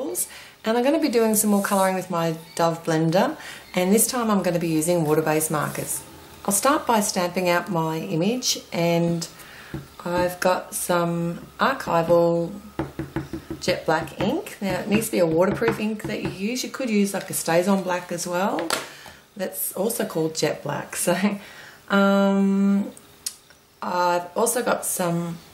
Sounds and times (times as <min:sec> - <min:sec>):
Speech: 0:00.0 - 0:09.3, 0:10.0 - 0:12.6, 0:13.6 - 0:18.7, 0:19.4 - 0:22.9, 0:23.8 - 0:25.4.